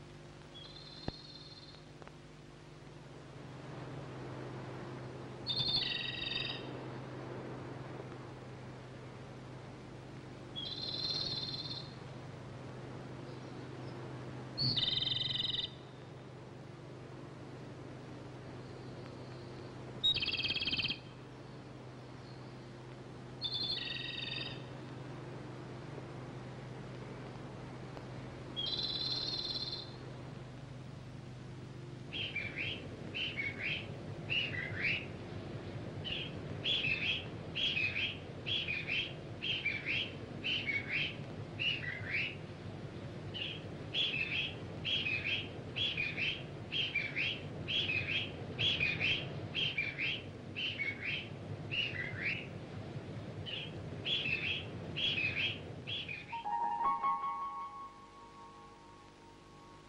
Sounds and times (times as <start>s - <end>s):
Chirp, tweet: 0.5s - 1.8s, 5.5s - 6.7s, 10.6s - 12.0s, 13.2s - 14.0s, 14.6s - 16.1s, 18.5s - 21.6s, 23.4s - 24.7s, 28.6s - 30.0s, 32.1s - 35.1s, 36.0s - 42.4s, 43.4s - 52.5s, 53.5s - 57.6s.